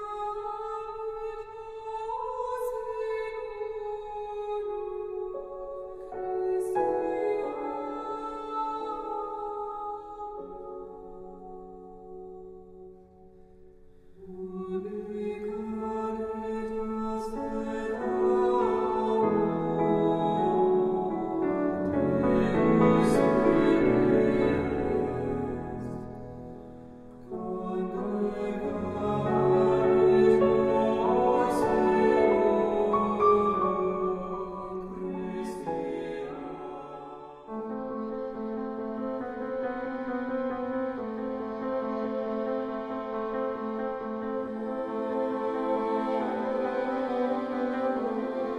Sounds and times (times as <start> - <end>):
Music: 0.0 - 48.5.